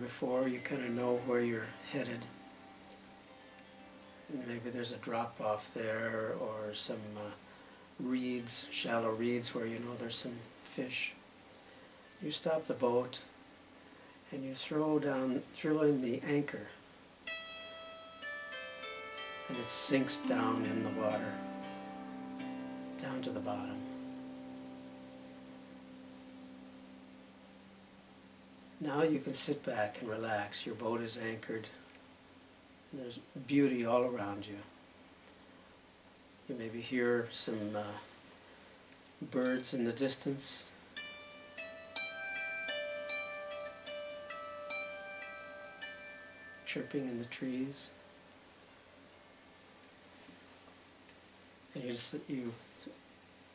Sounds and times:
Speech: 0.0s - 2.3s, 4.3s - 7.4s, 8.0s - 11.2s, 12.2s - 13.3s, 14.3s - 16.8s, 19.5s - 21.4s, 23.0s - 23.9s, 28.8s - 31.8s, 32.9s - 34.7s, 36.5s - 38.1s, 39.2s - 40.8s, 46.7s - 48.0s, 51.7s - 53.0s
Plucked string instrument: 0.0s - 6.4s, 17.3s - 29.5s, 40.9s - 48.3s
Harp: 0.0s - 6.6s, 17.3s - 30.4s, 39.2s - 49.5s.

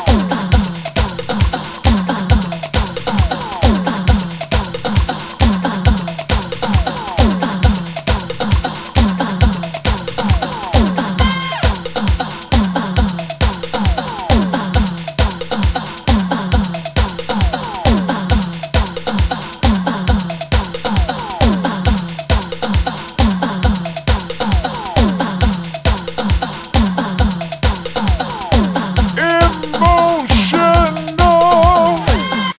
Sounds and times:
Music: 0.0s - 32.5s.

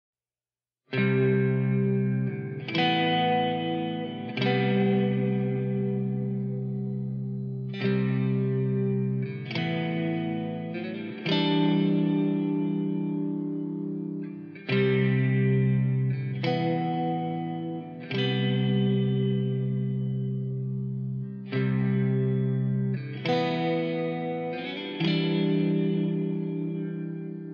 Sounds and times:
Music: 0.9s - 27.5s.

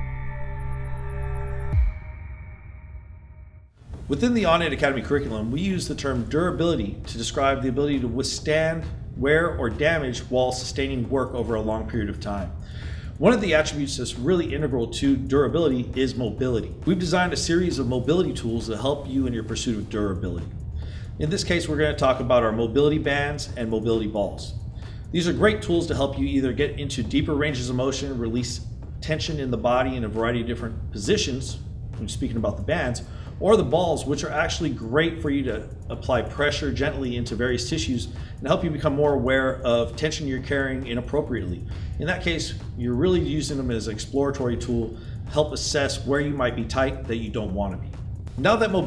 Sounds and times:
Speech: 4.1s - 12.6s, 13.2s - 20.5s, 21.2s - 48.8s.

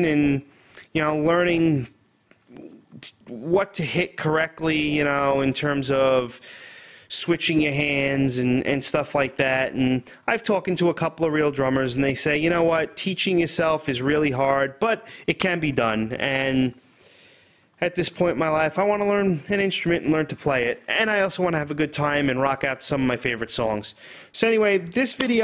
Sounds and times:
Speech: 0.0s - 6.4s, 7.1s - 16.8s, 17.8s - 25.4s.

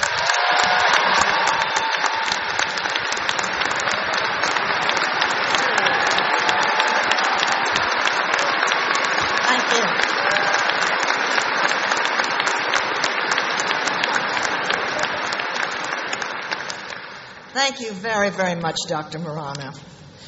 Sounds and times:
Female speech, woman speaking: 9.5s - 9.9s, 17.6s - 19.8s.

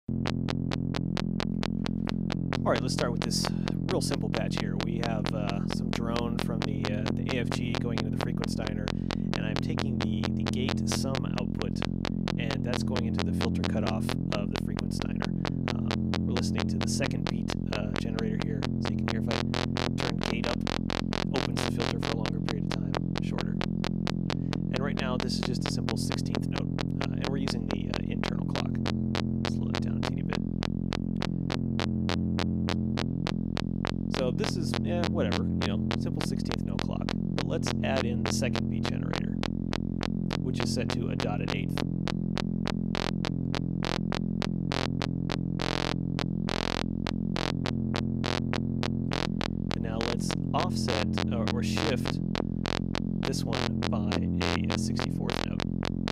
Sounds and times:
Speech: 2.6s - 19.4s, 20.0s - 20.6s, 21.3s - 23.6s, 24.7s - 28.8s, 29.5s - 30.4s, 34.1s - 39.4s, 40.3s - 41.8s, 49.8s - 52.2s, 53.2s - 55.6s.

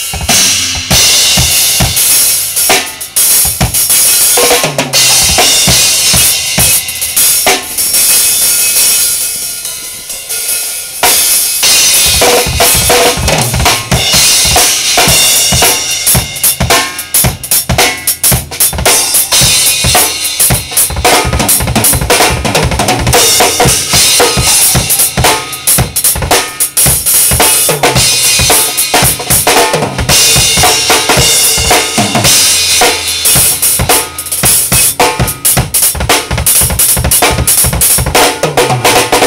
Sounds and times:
Drum: 0.0s - 39.2s
Drum kit: 0.0s - 39.2s.

